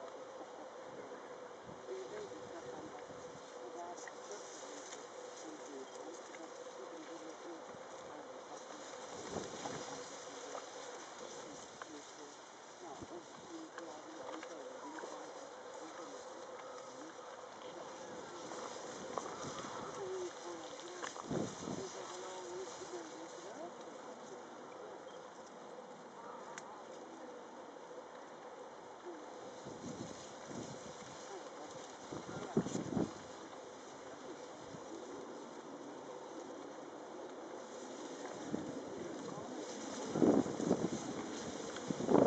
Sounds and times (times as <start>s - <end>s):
Outside, rural or natural: 0.0s - 42.2s.